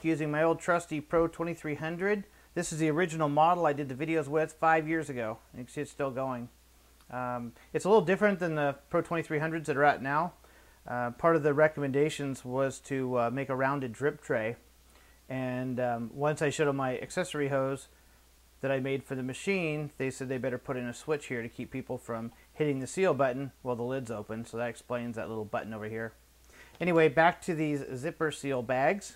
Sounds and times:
Speech: 0.0 - 14.6, 15.3 - 17.9, 18.6 - 26.2, 26.8 - 29.1.

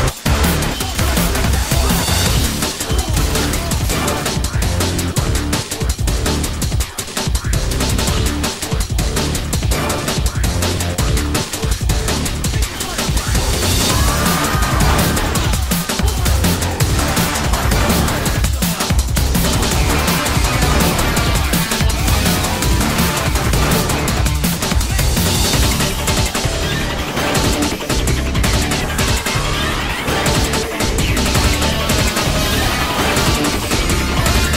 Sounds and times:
Music: 0.0 - 34.5.

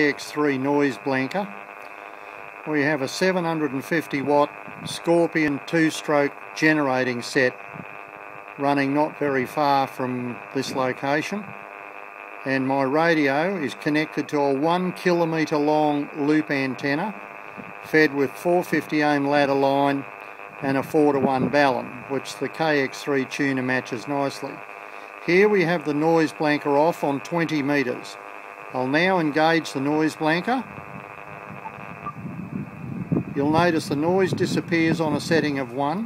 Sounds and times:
Speech: 0.0 - 1.6, 2.7 - 7.6, 8.6 - 11.5, 12.5 - 17.2, 17.9 - 20.0, 20.6 - 24.6, 25.2 - 28.2, 28.8 - 30.7, 33.4 - 36.0
White noise: 0.0 - 36.0.

